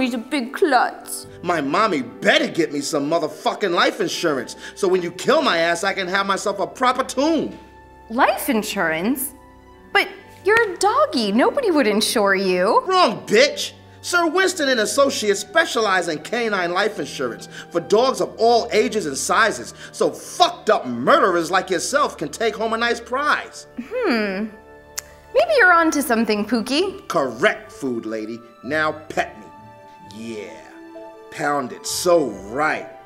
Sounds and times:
Music: 0.0 - 33.0.

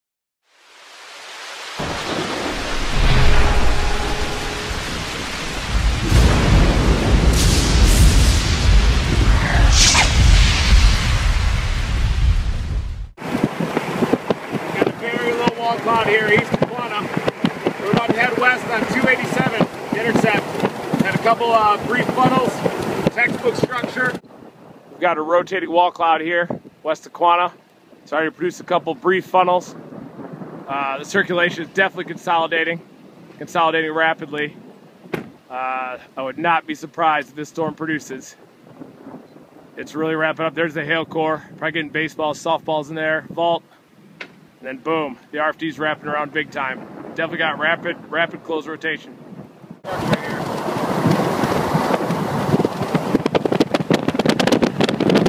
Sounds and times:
Rain on surface: 0.4 - 9.6, 10.4 - 25.0, 26.6 - 40.3, 49.2 - 55.2
Thunder: 1.8 - 24.2, 49.3 - 55.2.

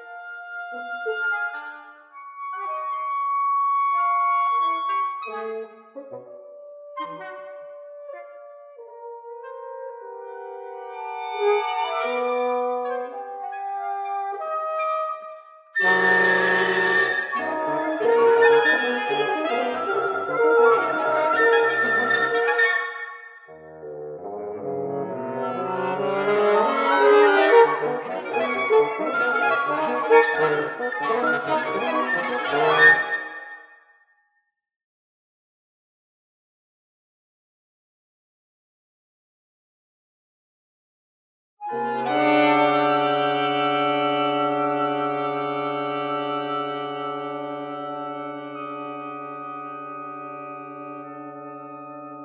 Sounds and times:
Orchestra: 0.0 - 33.6, 41.6 - 52.2
Clarinet: 0.0 - 34.0, 41.6 - 52.2.

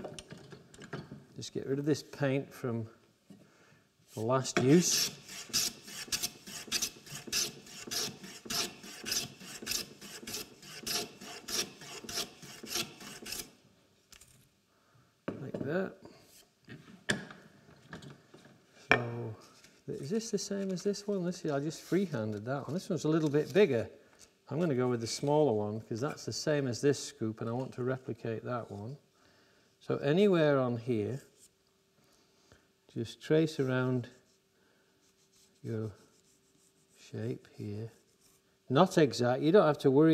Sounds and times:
Filing (rasp): 4.7 - 13.5.

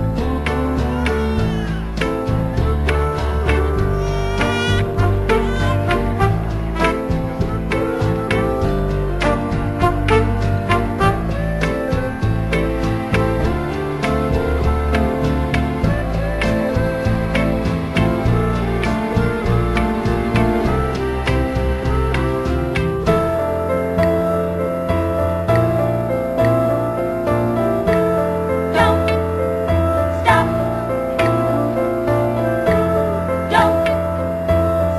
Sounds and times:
Music: 0.0 - 34.9.

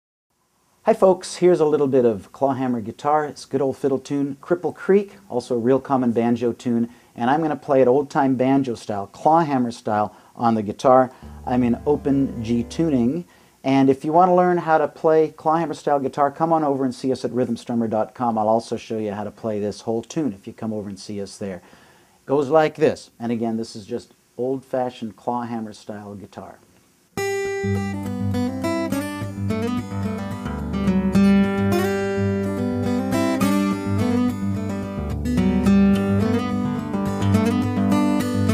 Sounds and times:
Acoustic guitar: 10.4 - 13.2, 27.2 - 38.5.

